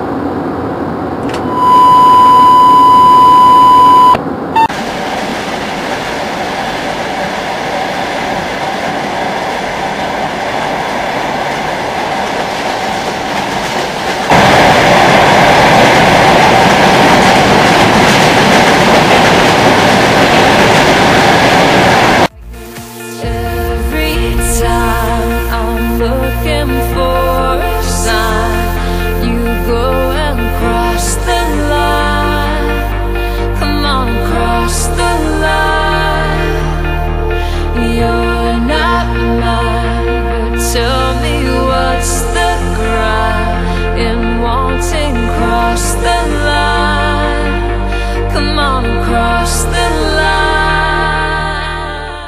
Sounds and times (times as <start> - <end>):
Railroad car, train wagon: 0.0 - 31.8
Outside, rural or natural: 0.0 - 49.0
Train: 0.0 - 52.2.